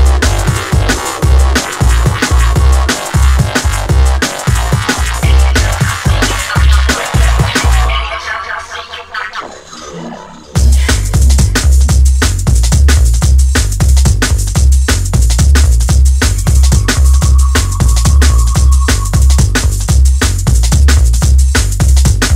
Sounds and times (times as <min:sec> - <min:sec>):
Music: 0:00.0 - 0:09.5, 0:10.6 - 0:22.3.